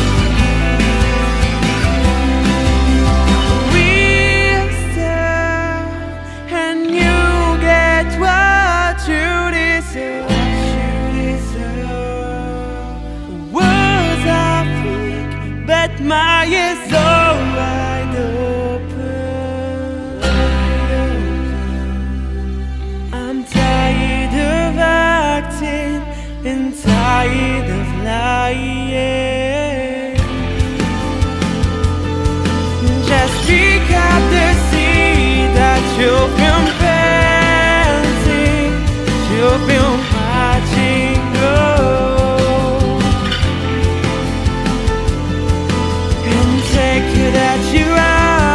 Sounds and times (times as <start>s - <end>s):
Music: 0.0s - 48.5s.